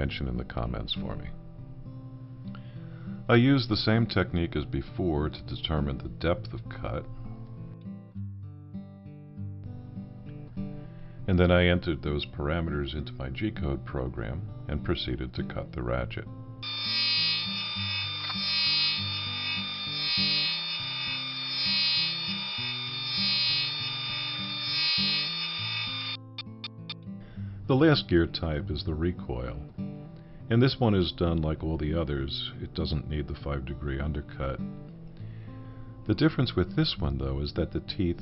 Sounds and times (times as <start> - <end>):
Speech: 0.0 - 1.4, 3.3 - 7.1, 11.3 - 16.3, 27.7 - 29.7, 30.5 - 34.7, 36.1 - 38.2
Music: 0.0 - 38.2.